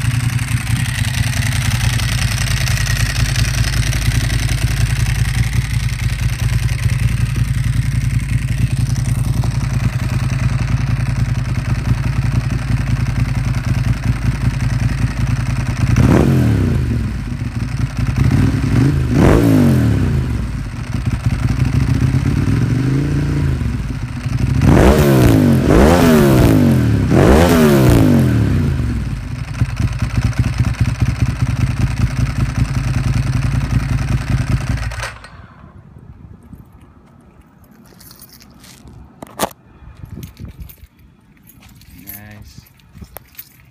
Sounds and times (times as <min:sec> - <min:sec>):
Motorcycle: 0:00.0 - 0:36.8.